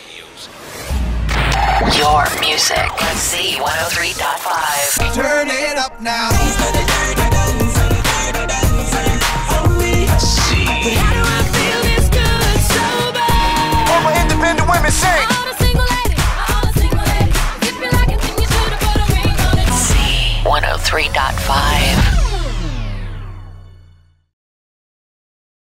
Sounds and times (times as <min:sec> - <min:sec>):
Music: 0:00.9 - 0:24.3
Speech: 0:01.6 - 0:04.9, 0:19.8 - 0:22.1.